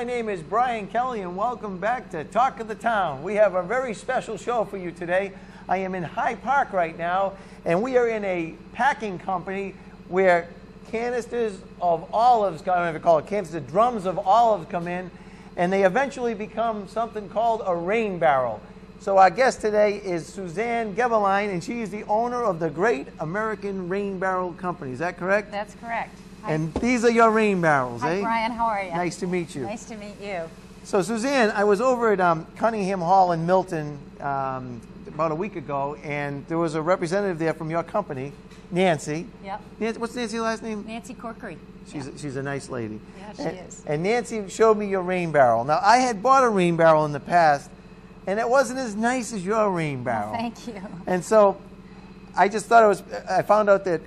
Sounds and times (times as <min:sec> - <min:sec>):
Speech: 0:00.0 - 0:25.3, 0:25.9 - 0:39.2, 0:41.9 - 0:47.7, 0:48.3 - 0:51.6, 0:52.4 - 0:54.0.